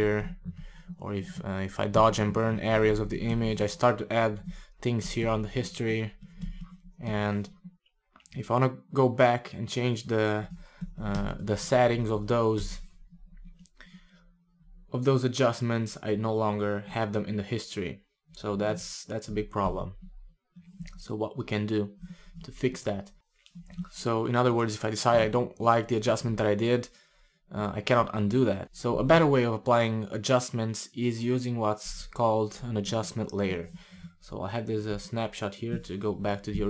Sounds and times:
Speech: 0.0 - 0.4, 1.0 - 6.2, 7.0 - 7.5, 8.3 - 12.8, 15.0 - 20.0, 21.0 - 23.1, 23.9 - 26.9, 27.5 - 36.7
Inside, small room: 0.0 - 36.7.

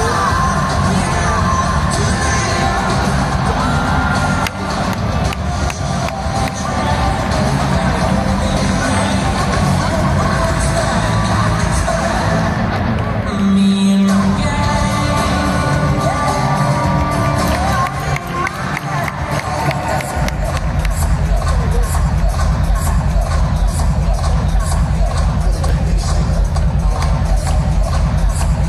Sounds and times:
Music: 0.0 - 28.6.

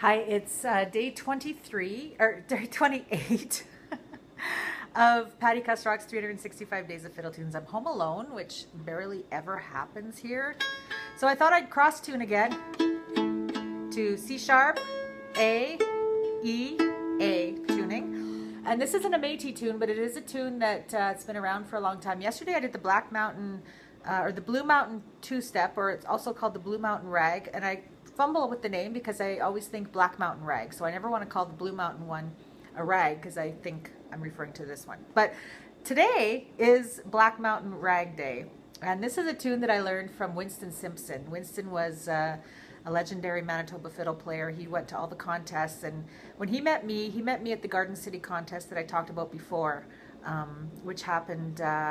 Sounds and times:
Speech: 0.0 - 3.7, 4.9 - 10.6, 11.2 - 12.6, 13.9 - 14.8, 15.4 - 15.8, 16.4 - 51.9.

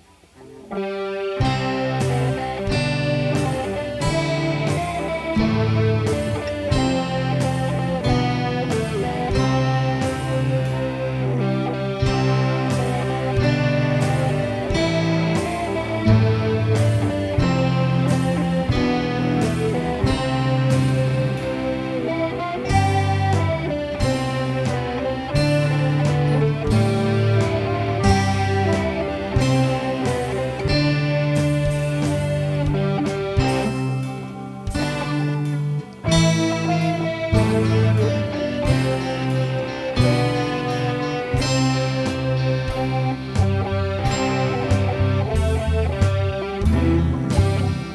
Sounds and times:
Music: 0.0 - 47.9.

